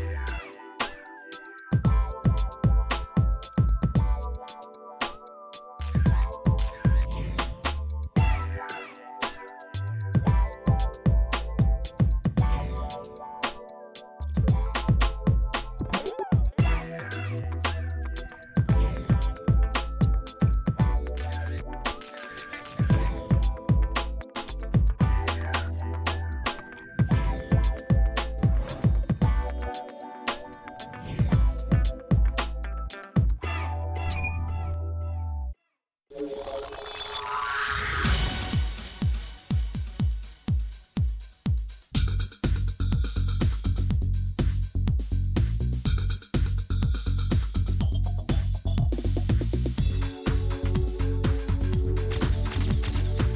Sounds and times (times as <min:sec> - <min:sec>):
Music: 0:00.0 - 0:53.3.